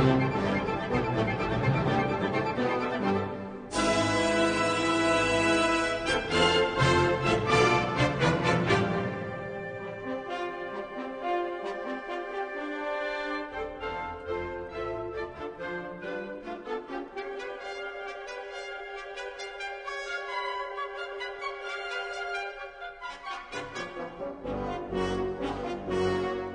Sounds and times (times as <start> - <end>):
Music: 0.0 - 26.5.